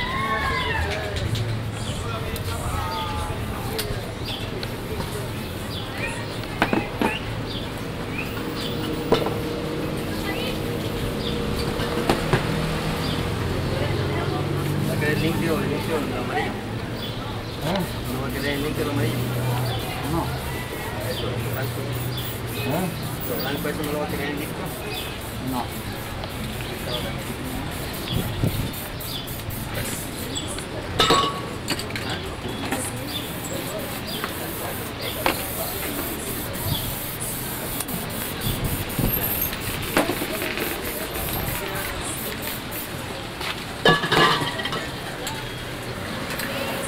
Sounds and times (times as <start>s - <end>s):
Speech: 0.0s - 7.3s, 13.4s - 28.5s, 29.7s - 38.4s, 40.0s - 43.7s
Spray: 17.7s - 30.8s, 32.7s - 43.0s.